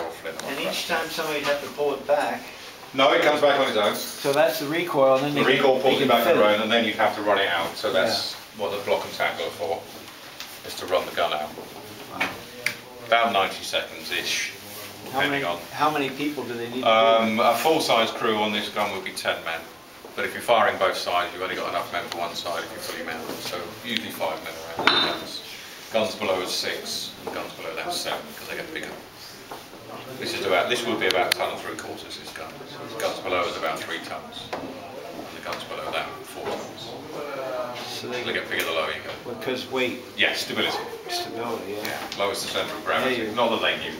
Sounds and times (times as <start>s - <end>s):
Speech: 29.9s - 44.0s.